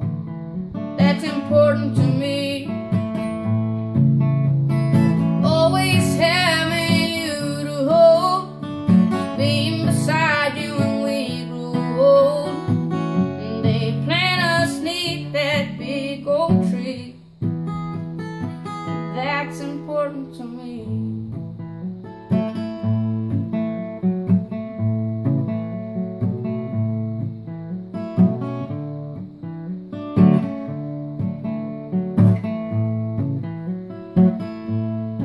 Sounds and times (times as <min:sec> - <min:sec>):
Acoustic guitar: 0:00.0 - 0:35.2.